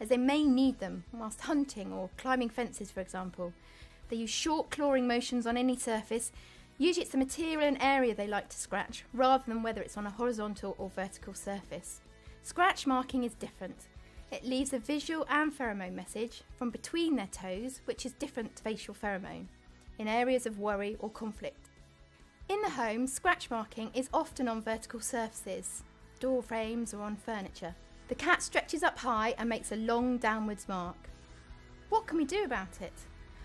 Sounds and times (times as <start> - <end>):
Speech: 0.0 - 21.6, 22.5 - 31.0, 31.9 - 33.0
Music: 0.0 - 33.4.